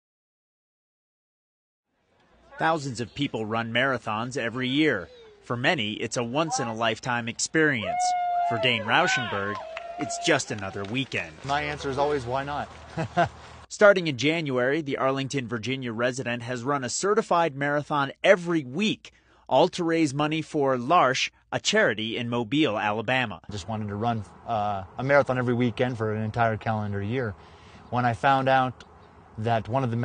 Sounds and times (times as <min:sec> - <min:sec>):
Speech: 0:02.5 - 0:12.7, 0:13.7 - 0:28.8, 0:29.4 - 0:30.0
Shout: 0:06.4 - 0:06.8, 0:07.8 - 0:10.4
Laughter: 0:12.8 - 0:13.4.